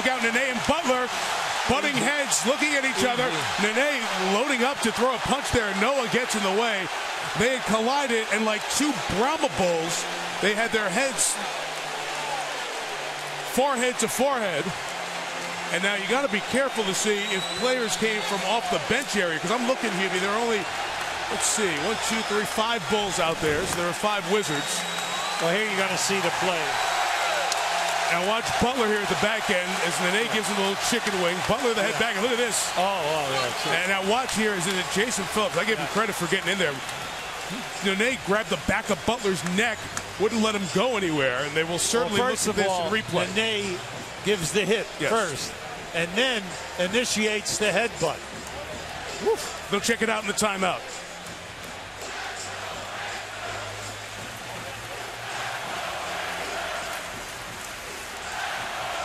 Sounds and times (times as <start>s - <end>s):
Speech: 0.0s - 11.4s, 15.7s - 20.6s, 21.3s - 24.8s, 25.4s - 26.8s, 28.1s - 36.8s, 37.8s - 48.2s, 49.3s - 50.8s.